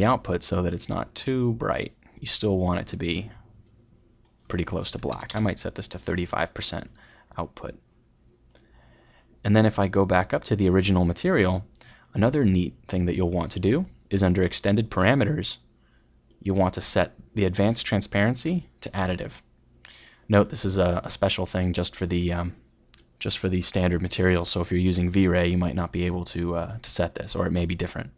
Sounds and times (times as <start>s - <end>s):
Speech: 0.0s - 3.4s, 4.5s - 7.8s, 9.4s - 15.7s, 16.4s - 19.5s, 20.3s - 22.6s, 23.2s - 28.1s
Clicking: 3.6s - 4.5s, 8.3s - 8.7s.